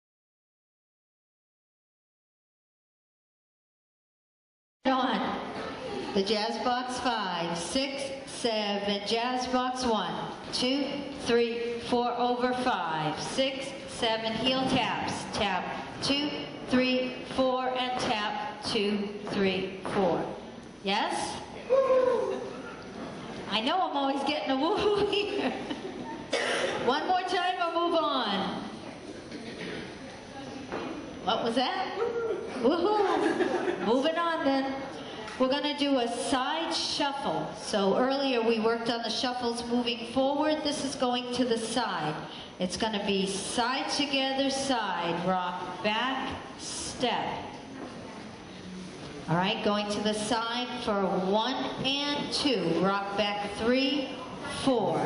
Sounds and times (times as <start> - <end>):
Speech: 4.9 - 22.8, 23.5 - 25.2, 30.1 - 33.2, 33.8 - 47.5, 49.2 - 55.0.